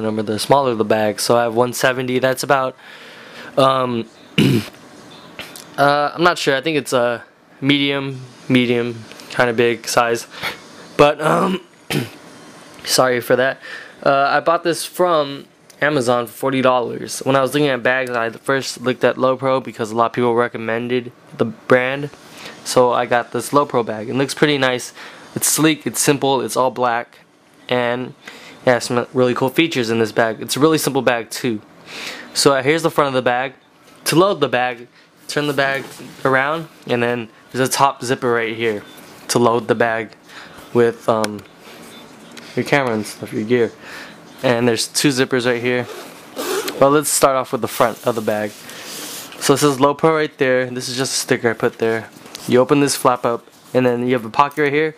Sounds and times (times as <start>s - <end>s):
Speech: 0.0s - 2.8s, 3.5s - 10.3s, 11.0s - 12.1s, 12.8s - 31.7s, 32.4s - 41.5s, 42.5s - 46.0s, 46.6s - 48.6s, 49.4s - 54.9s.